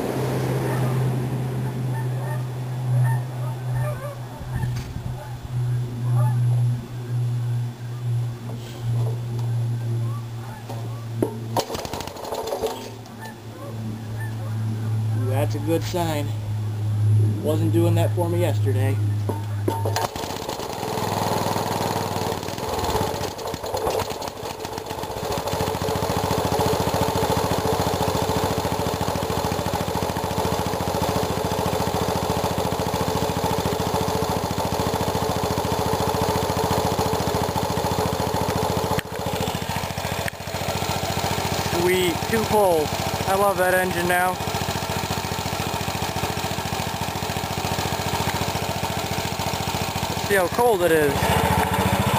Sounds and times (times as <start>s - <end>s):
Engine starting: 11.6s - 13.0s, 19.8s - 20.9s, 22.8s - 24.8s.